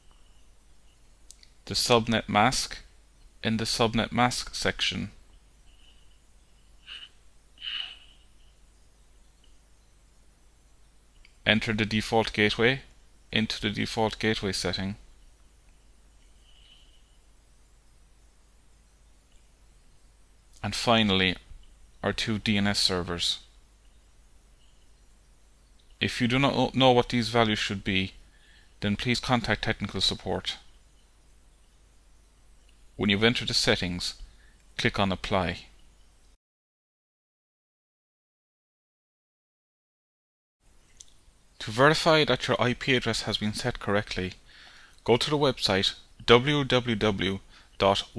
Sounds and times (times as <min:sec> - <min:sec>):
Inside, small room: 0:00.0 - 0:36.4, 0:40.6 - 0:48.1
Speech: 0:01.7 - 0:05.2, 0:11.4 - 0:15.0, 0:20.6 - 0:23.5, 0:26.0 - 0:28.2, 0:28.8 - 0:30.7, 0:33.0 - 0:34.2, 0:34.8 - 0:35.8, 0:41.6 - 0:44.4, 0:45.0 - 0:48.1.